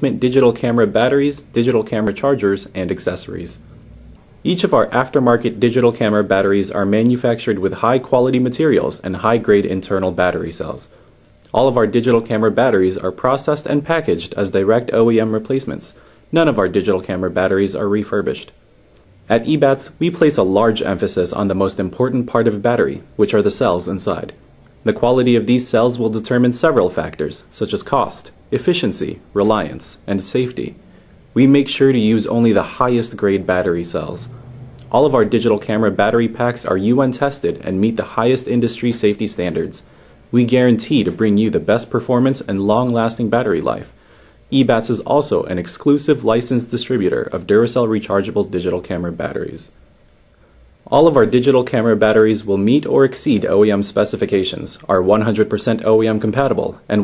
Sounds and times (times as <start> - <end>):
Speech: 0.0 - 3.6, 4.4 - 18.6, 19.3 - 30.8, 31.4 - 49.8, 50.8 - 57.0.